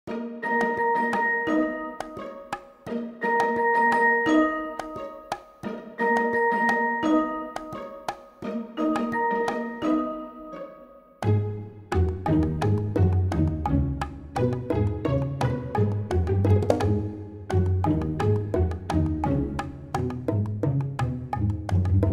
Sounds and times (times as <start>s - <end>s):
Glockenspiel: 0.1s - 13.5s.